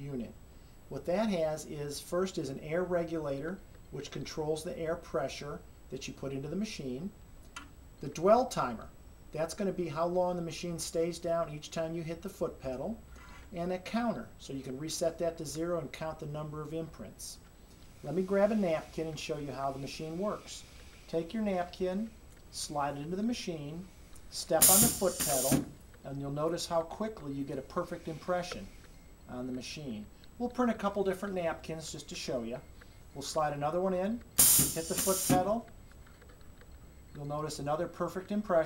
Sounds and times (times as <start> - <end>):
Speech: 0.0 - 7.2, 8.0 - 17.4, 18.0 - 28.7, 29.3 - 32.6, 33.2 - 35.7, 37.2 - 38.6.